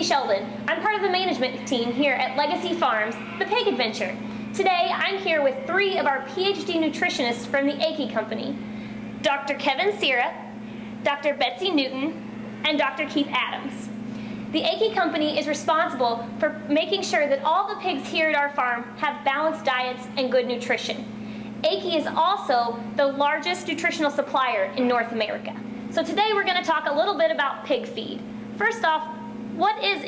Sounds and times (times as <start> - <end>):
Speech: 0.0 - 8.6, 9.2 - 10.4, 11.0 - 13.9, 14.6 - 30.0.